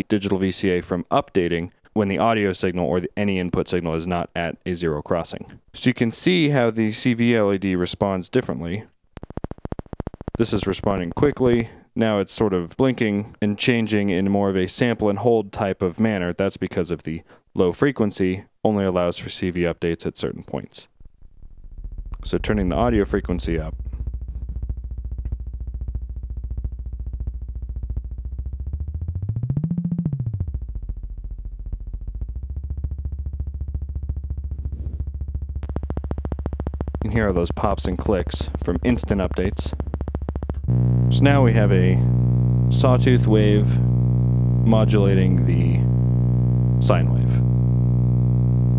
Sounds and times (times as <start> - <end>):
Speech: 0.0 - 8.9, 10.4 - 20.9, 22.2 - 23.8, 37.0 - 39.8, 41.1 - 42.1, 42.7 - 43.9, 44.6 - 45.9, 46.8 - 47.5.